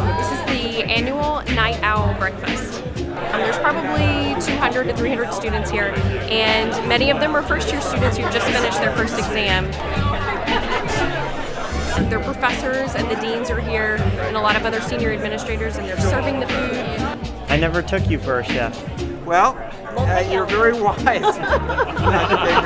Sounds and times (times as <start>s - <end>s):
Speech: 0.0s - 9.8s, 12.0s - 22.6s
Music: 0.0s - 22.6s.